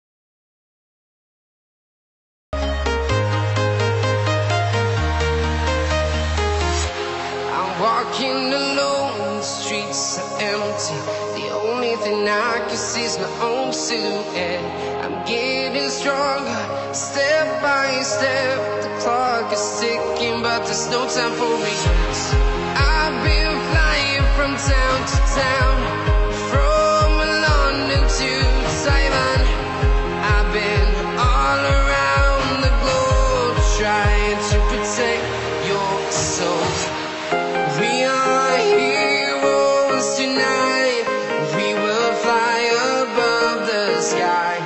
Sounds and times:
Music: 2.6 - 44.6.

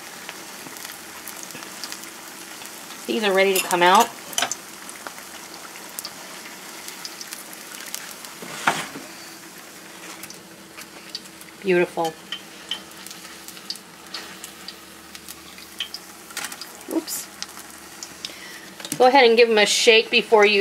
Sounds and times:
Frying (food): 0.0 - 20.6
Speech: 3.1 - 4.1, 11.6 - 12.2, 16.9 - 17.3, 19.0 - 20.6.

